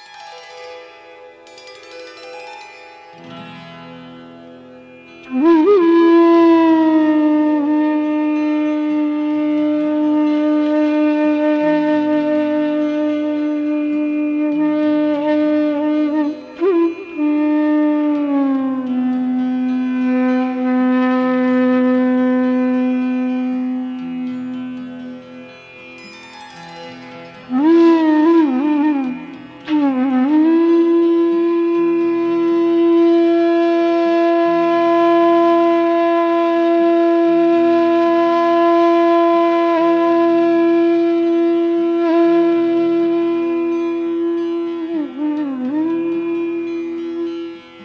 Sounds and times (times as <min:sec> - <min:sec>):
Flute: 0:04.9 - 0:25.1, 0:26.6 - 0:47.8.